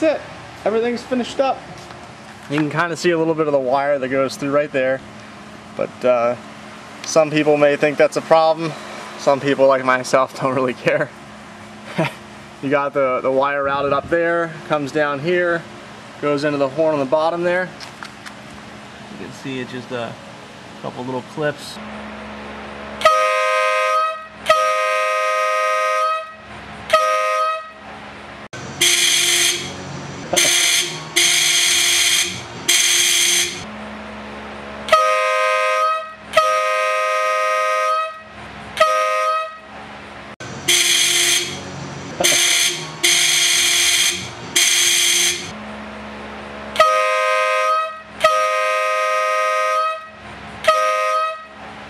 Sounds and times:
Vehicle horn, car horn, honking: 0:23.0 - 0:27.8, 0:28.8 - 0:29.8, 0:30.4 - 0:33.6, 0:34.9 - 0:39.7, 0:40.7 - 0:45.5, 0:46.8 - 0:51.6.

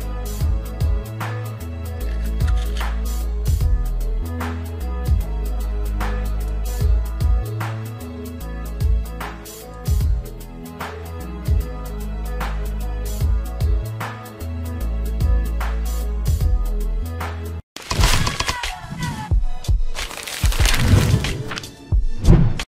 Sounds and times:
Music: 0:00.0 - 0:22.6.

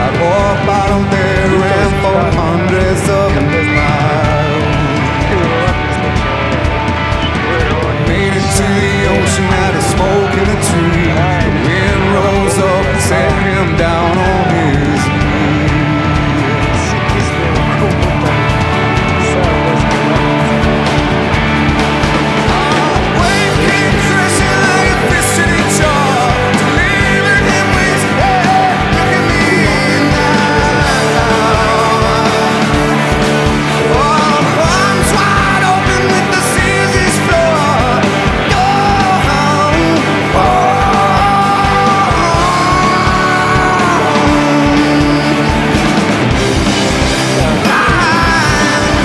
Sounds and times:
Speech: 0:00.0 - 0:20.6
Music: 0:00.0 - 0:49.0.

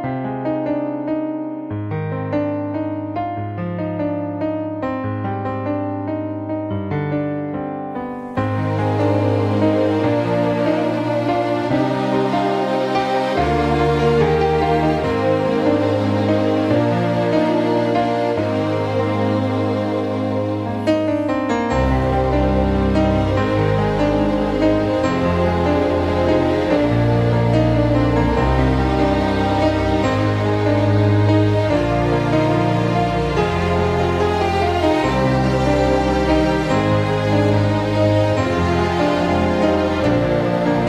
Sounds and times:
Background music: 0:00.0 - 0:40.8.

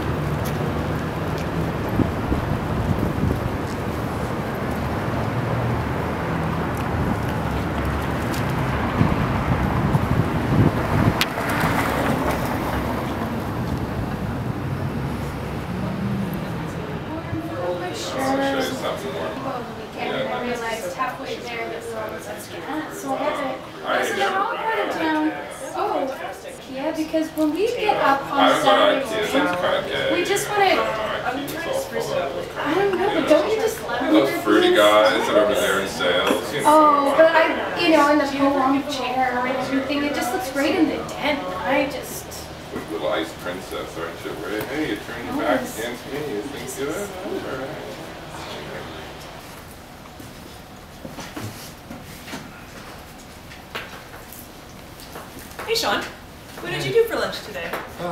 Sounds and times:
Speech: 0:17.1 - 0:49.0.

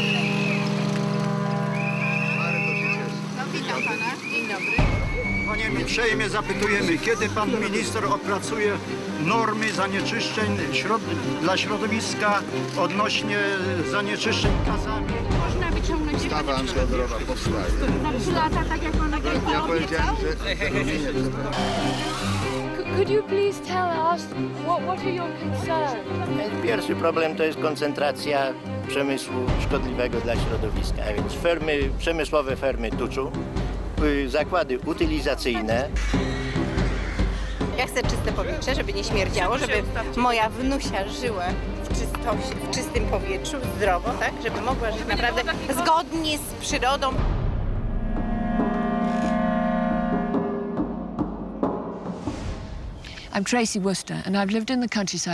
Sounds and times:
Music: 0:00.0 - 0:55.3.

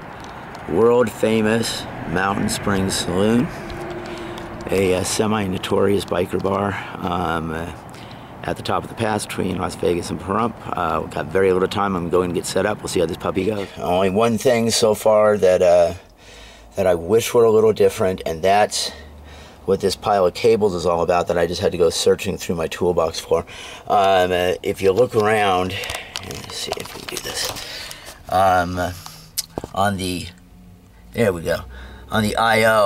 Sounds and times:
Speech: 0:00.7 - 0:03.5, 0:04.7 - 0:07.8, 0:08.4 - 0:16.0, 0:16.8 - 0:19.0, 0:19.7 - 0:27.6, 0:28.3 - 0:29.0, 0:29.7 - 0:30.4, 0:31.2 - 0:32.8.

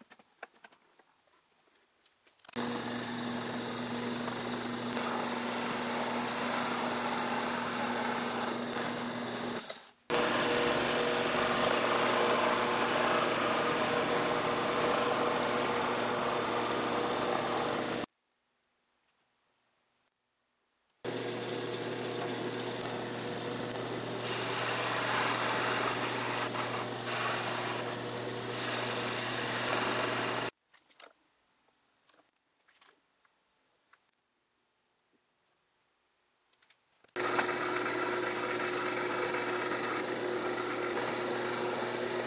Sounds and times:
Drill: 0:02.6 - 0:18.1, 0:21.1 - 0:30.6, 0:37.2 - 0:42.2.

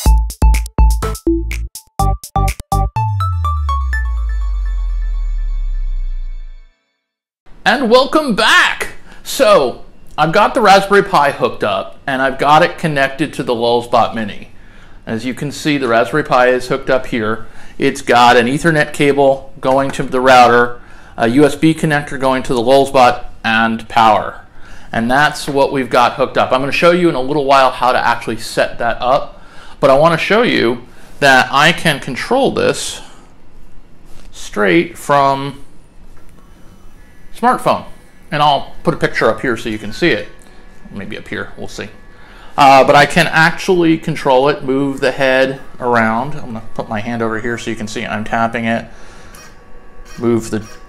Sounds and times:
Speech: 0:07.6 - 0:14.5, 0:15.1 - 0:33.1, 0:34.3 - 0:35.6, 0:37.4 - 0:42.0, 0:42.6 - 0:48.9, 0:50.2 - 0:50.7.

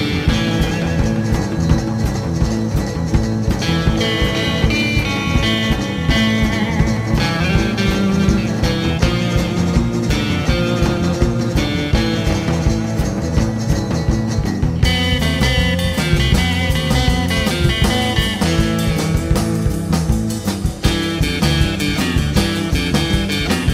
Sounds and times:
Bass guitar: 0:00.0 - 0:23.7
Rock and roll: 0:00.0 - 0:23.7.

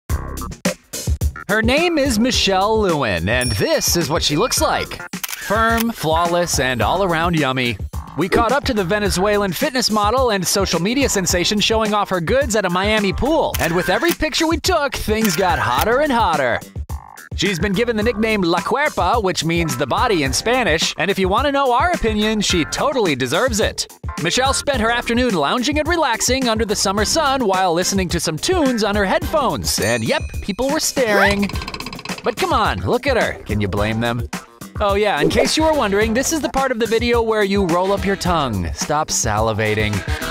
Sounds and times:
Music: 0:00.1 - 0:40.3
Speech: 0:01.5 - 0:16.7, 0:17.4 - 0:31.5, 0:32.3 - 0:40.2.

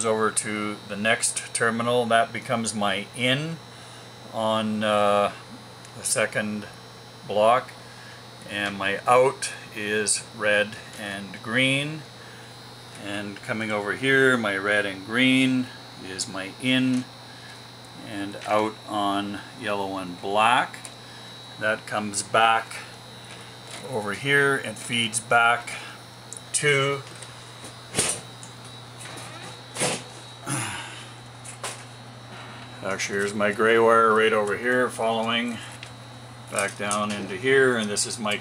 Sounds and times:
Speech: 0:00.0 - 0:03.6, 0:04.3 - 0:05.4, 0:06.0 - 0:06.7, 0:07.3 - 0:07.7, 0:08.4 - 0:12.1, 0:13.0 - 0:17.1, 0:18.0 - 0:20.8, 0:21.6 - 0:22.9, 0:23.8 - 0:25.8, 0:26.5 - 0:27.1, 0:32.8 - 0:35.6, 0:36.5 - 0:38.4.

